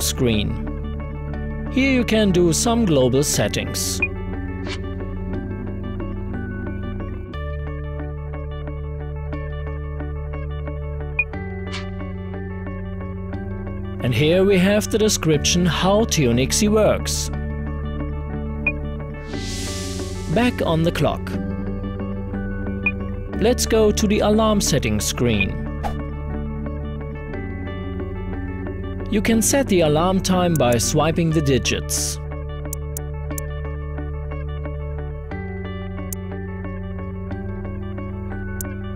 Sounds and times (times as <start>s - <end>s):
Speech: 0.0s - 0.7s, 1.7s - 4.0s, 14.0s - 17.4s, 20.3s - 21.4s, 23.4s - 25.7s, 29.1s - 32.2s
Music: 0.0s - 38.9s.